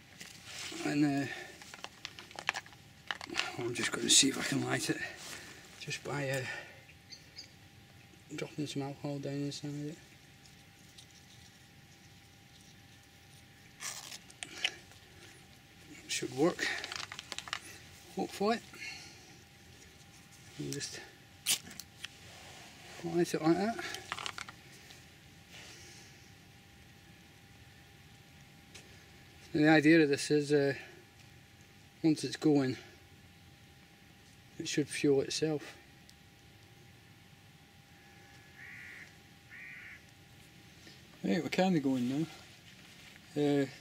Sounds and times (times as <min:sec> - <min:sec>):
Outside, rural or natural: 0:00.0 - 0:43.8
Speech: 0:00.7 - 0:01.5, 0:03.4 - 0:05.2, 0:05.8 - 0:06.7, 0:08.3 - 0:10.0, 0:16.1 - 0:16.8, 0:18.2 - 0:18.6, 0:20.6 - 0:21.1, 0:23.0 - 0:24.0, 0:29.5 - 0:30.9, 0:32.0 - 0:32.9, 0:34.6 - 0:35.8, 0:41.2 - 0:42.4, 0:43.3 - 0:43.8.